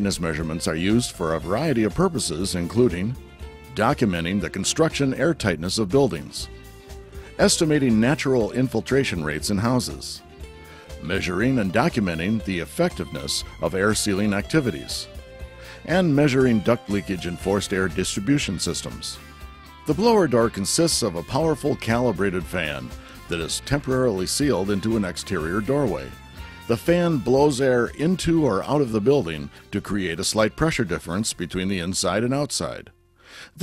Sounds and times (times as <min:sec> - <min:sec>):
Speech: 0:00.0 - 0:06.5, 0:07.4 - 0:10.2, 0:11.0 - 0:15.1, 0:15.9 - 0:19.2, 0:19.9 - 0:26.1, 0:26.7 - 0:32.9
Music: 0:00.0 - 0:33.6.